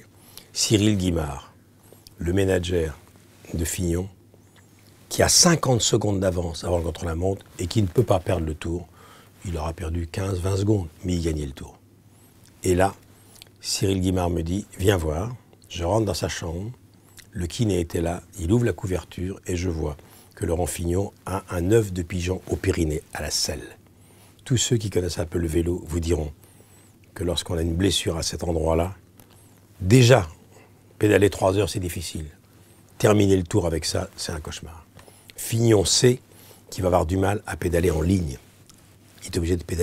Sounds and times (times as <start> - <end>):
Speech: 0.0 - 1.6, 2.2 - 4.2, 5.1 - 11.8, 12.6 - 13.0, 13.6 - 23.8, 24.4 - 26.4, 27.2 - 29.0, 29.8 - 30.4, 31.0 - 32.4, 33.0 - 38.5, 39.2 - 39.8.